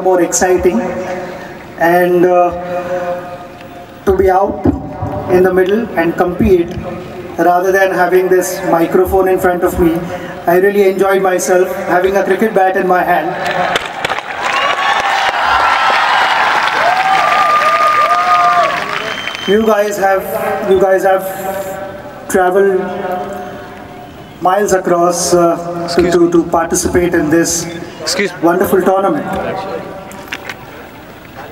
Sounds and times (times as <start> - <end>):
Male speech, man speaking: 0.0 - 1.2, 1.8 - 2.6, 4.1 - 4.7, 5.3 - 13.4, 19.5 - 23.3, 24.4 - 30.0
Narration, monologue: 0.0 - 13.4, 19.5 - 30.3.